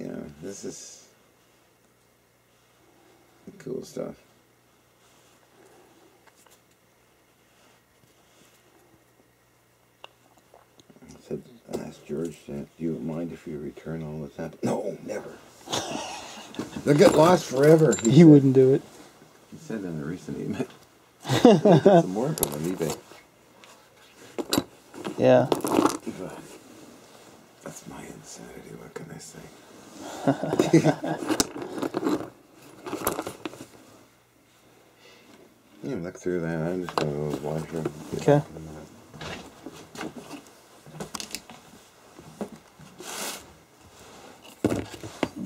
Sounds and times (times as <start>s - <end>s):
Speech: 0.0s - 1.1s, 3.5s - 4.3s, 11.0s - 15.4s, 27.6s - 29.5s, 35.8s - 38.9s
Inside, small room: 0.0s - 45.4s.